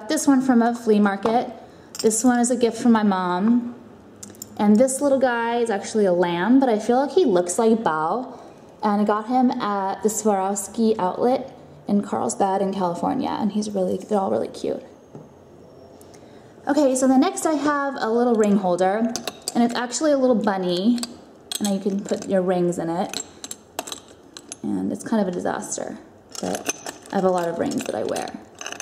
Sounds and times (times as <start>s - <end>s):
Speech: 0.0s - 3.8s, 4.6s - 14.9s, 16.7s - 23.2s, 24.6s - 28.4s.